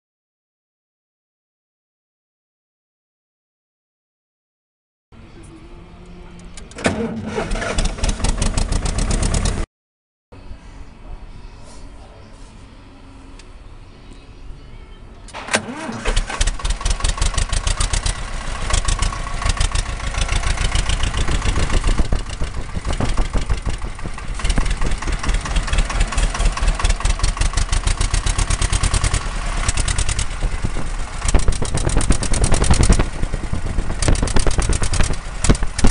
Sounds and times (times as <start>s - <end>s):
Heavy engine (low frequency): 5.2s - 9.7s, 10.4s - 35.9s
Vehicle: 5.2s - 9.7s, 10.4s - 35.9s.